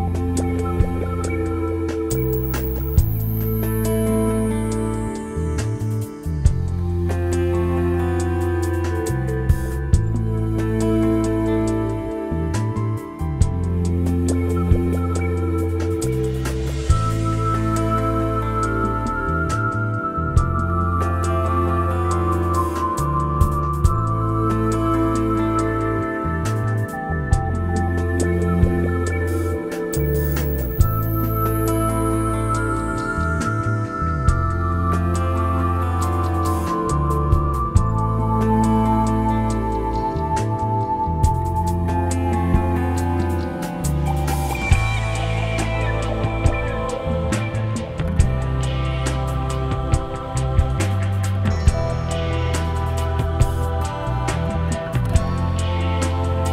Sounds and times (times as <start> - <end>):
New-age music: 0.0 - 56.5.